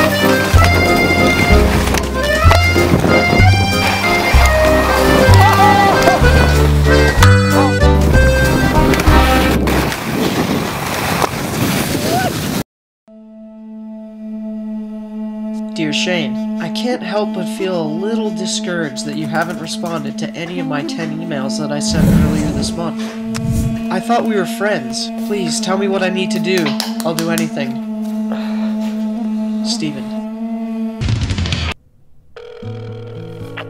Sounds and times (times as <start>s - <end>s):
Music: 0.0s - 9.7s, 13.1s - 31.2s, 32.6s - 33.6s
Outside, urban or manmade: 0.0s - 16.6s, 26.5s - 33.6s
Speech: 15.8s - 23.0s, 23.9s - 27.8s, 29.7s - 30.2s.